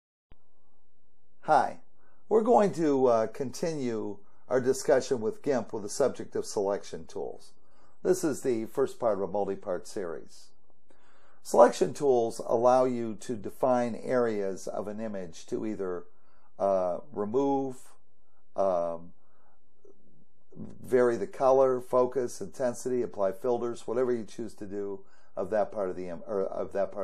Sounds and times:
Speech: 1.4s - 10.6s, 11.4s - 18.0s, 18.6s - 19.1s, 20.6s - 27.0s.

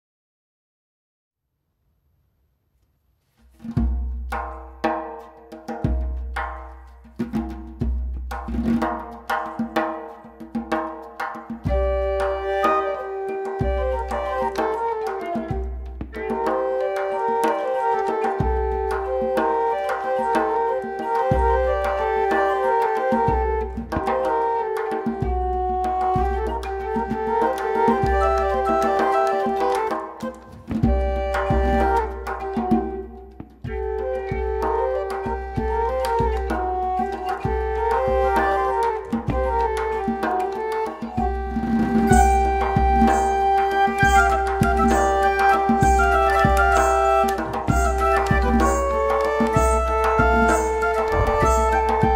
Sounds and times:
Percussion: 3.2s - 52.1s.

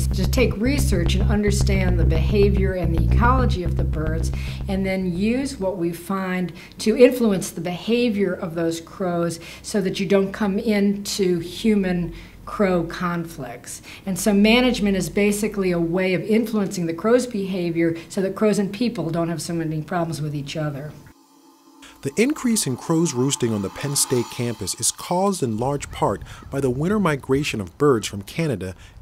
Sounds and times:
Speech: 0.0s - 21.0s, 22.0s - 28.8s.

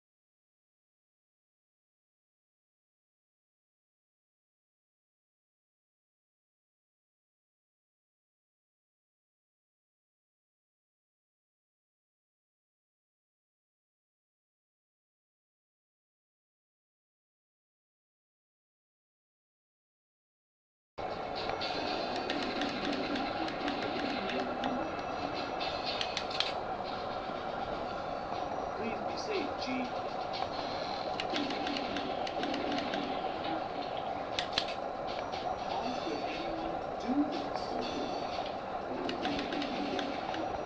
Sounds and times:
Speech: 28.8s - 30.0s, 35.9s - 38.1s.

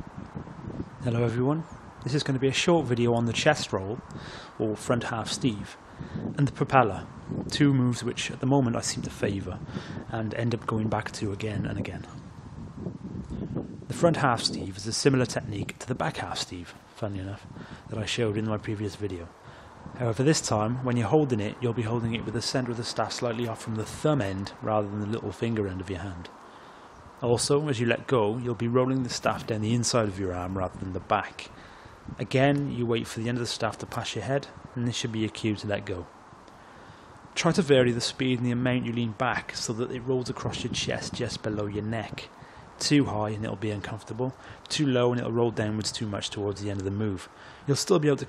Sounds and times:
Speech: 1.0s - 5.8s, 6.4s - 12.2s, 13.9s - 19.4s, 20.0s - 26.4s, 27.2s - 31.6s, 32.2s - 36.1s, 37.4s - 48.2s.

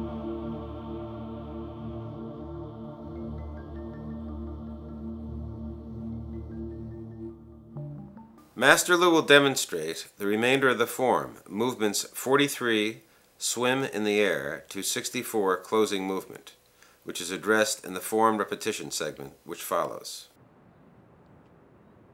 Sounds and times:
Speech: 8.6s - 20.4s.

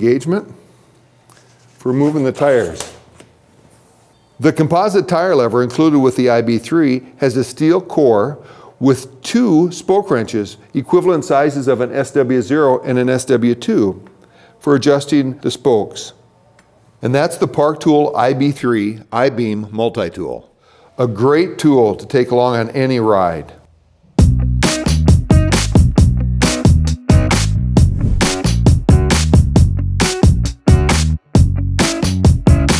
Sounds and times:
Speech: 0.0s - 0.6s, 1.8s - 3.0s, 4.4s - 16.2s, 17.0s - 23.6s
Music: 24.2s - 32.7s.

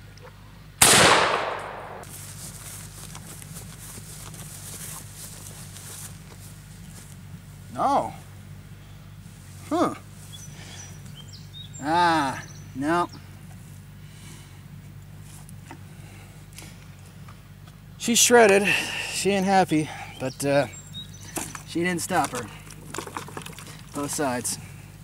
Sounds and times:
Outside, rural or natural: 0.0s - 25.0s
Speech: 7.7s - 8.2s, 11.8s - 13.2s, 18.0s - 20.8s, 21.7s - 22.6s, 24.0s - 24.6s.

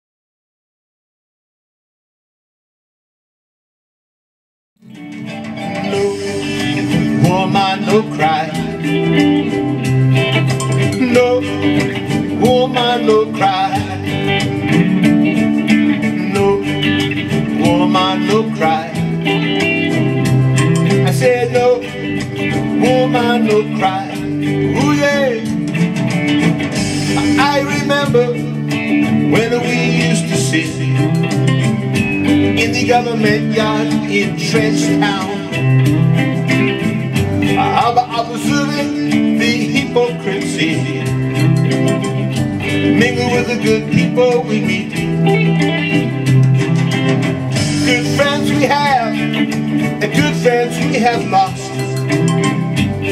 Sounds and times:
Acoustic guitar: 4.8s - 53.1s.

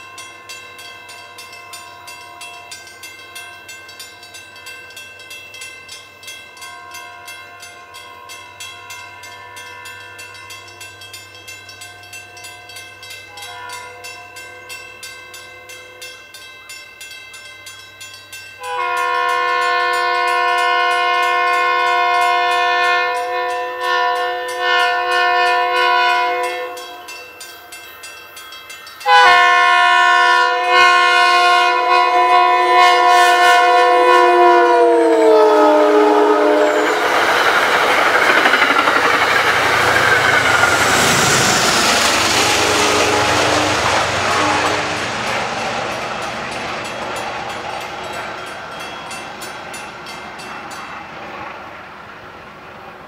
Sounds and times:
Train: 0.0s - 53.0s.

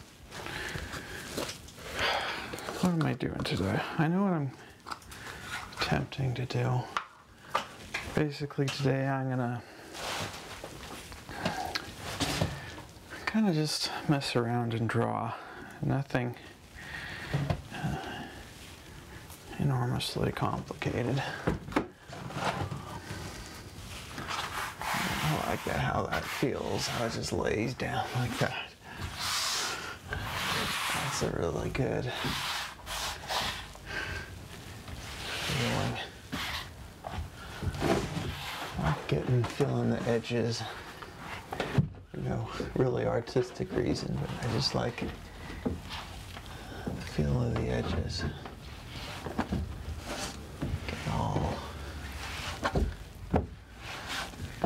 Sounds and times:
Speech: 2.8s - 4.6s, 5.8s - 7.0s, 8.1s - 9.7s, 13.2s - 16.5s, 19.5s - 21.4s, 25.2s - 28.8s, 31.0s - 32.3s, 35.4s - 36.2s, 38.8s - 40.8s, 42.1s - 45.2s, 47.0s - 48.4s, 50.8s - 51.8s.

